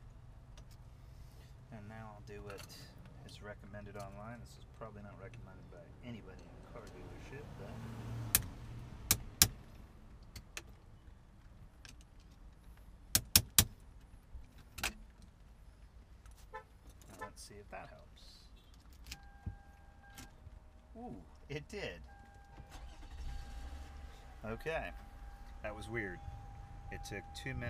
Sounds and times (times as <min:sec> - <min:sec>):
Vehicle: 0:00.0 - 0:27.6
Speech: 0:01.7 - 0:07.8, 0:17.2 - 0:18.5, 0:21.0 - 0:22.0, 0:24.4 - 0:24.9, 0:25.6 - 0:26.2, 0:26.9 - 0:27.6.